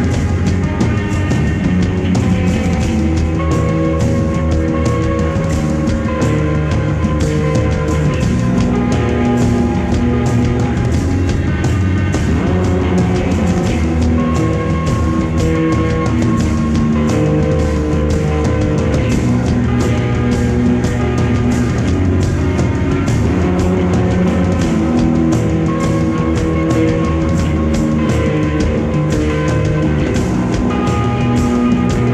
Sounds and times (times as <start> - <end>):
Music: 0.0 - 32.1.